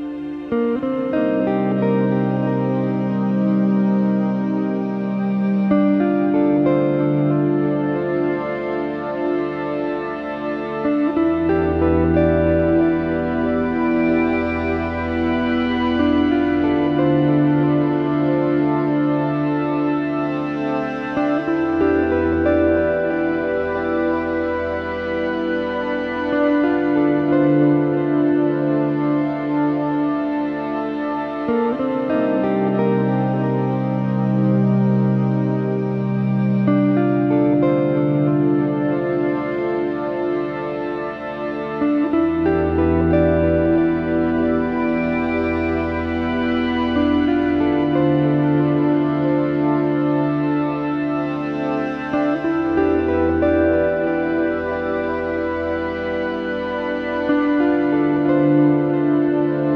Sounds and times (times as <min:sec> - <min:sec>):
Synthesizer: 0:00.0 - 0:59.7.